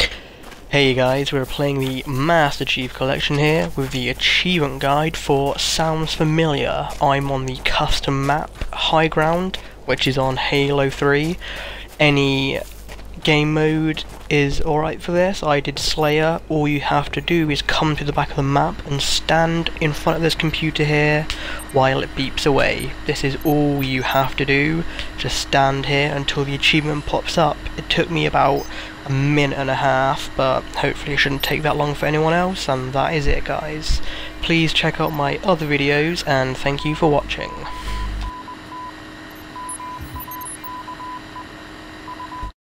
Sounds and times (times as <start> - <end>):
Speech: 0.7 - 37.8.